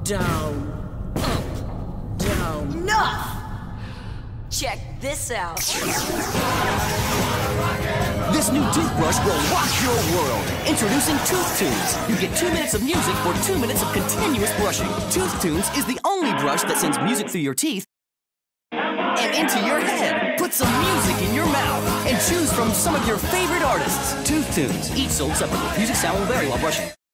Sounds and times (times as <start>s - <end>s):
Speech: 0.0s - 0.8s, 2.2s - 3.4s, 4.6s - 5.6s, 8.3s - 17.9s, 19.2s - 27.0s
Music: 5.8s - 16.0s, 18.8s - 27.0s.